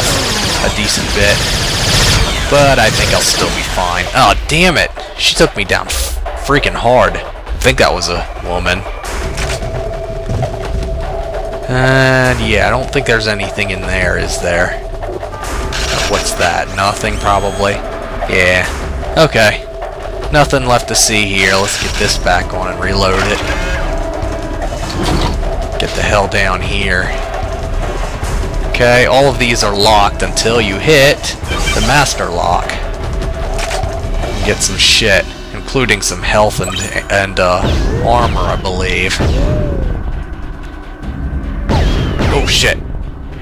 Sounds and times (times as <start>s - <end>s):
Speech: 0.6s - 1.4s, 2.5s - 8.8s, 11.7s - 14.8s, 15.9s - 19.6s, 20.3s - 23.5s, 25.8s - 27.2s, 28.8s - 32.8s, 34.4s - 39.8s, 42.2s - 42.8s.